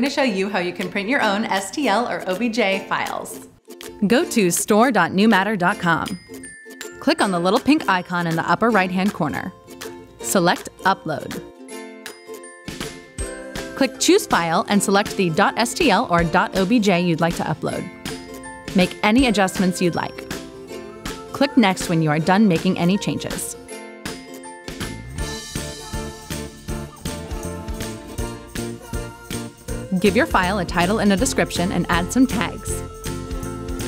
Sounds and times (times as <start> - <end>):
Speech: 0.0 - 3.4, 4.0 - 6.2, 7.0 - 9.5, 10.3 - 11.4, 13.8 - 17.9, 18.8 - 20.2, 21.4 - 23.6, 30.0 - 32.8
Music: 0.0 - 33.8.